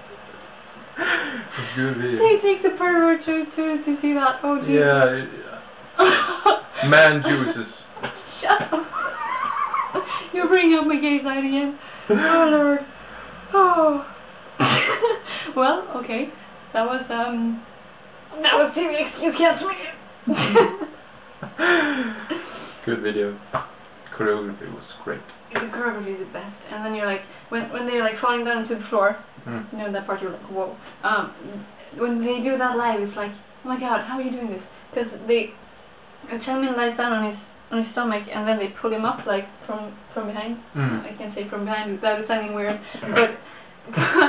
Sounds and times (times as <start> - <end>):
Speech: 1.6 - 5.6, 6.8 - 7.8, 22.9 - 23.4, 24.1 - 35.5.